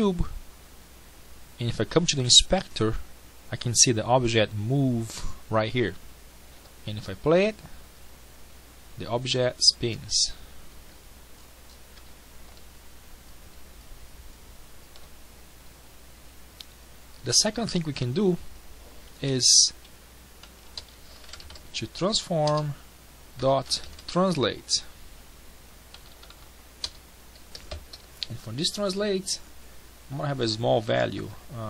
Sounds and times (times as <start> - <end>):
Typing: 20.4 - 21.6, 25.9 - 28.0.